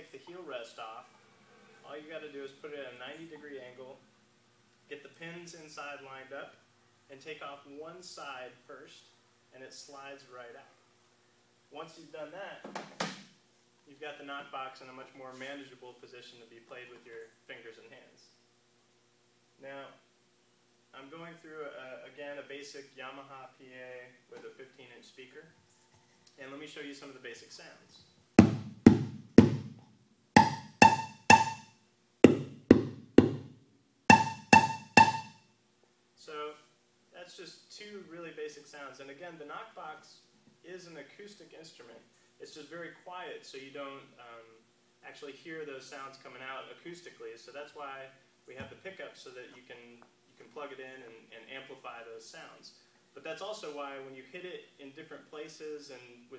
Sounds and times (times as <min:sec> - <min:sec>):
Speech: 0:00.0 - 0:01.1, 0:01.8 - 0:04.0, 0:04.9 - 0:10.8, 0:11.7 - 0:12.7, 0:13.9 - 0:18.4, 0:19.6 - 0:20.0, 0:20.9 - 0:25.6, 0:26.4 - 0:28.1, 0:36.2 - 0:56.3.